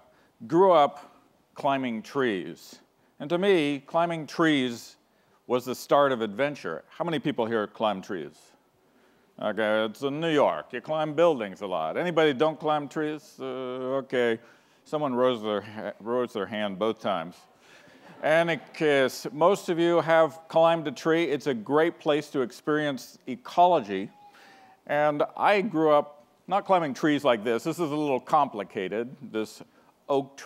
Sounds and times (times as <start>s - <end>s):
Speech: 0.0s - 8.6s, 9.4s - 17.5s, 18.2s - 24.2s, 24.8s - 30.4s.